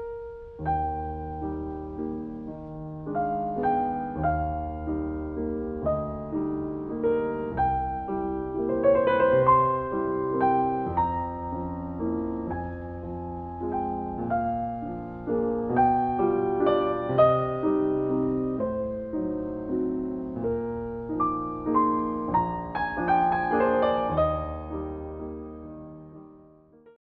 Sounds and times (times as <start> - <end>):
Music: 0.0 - 27.0.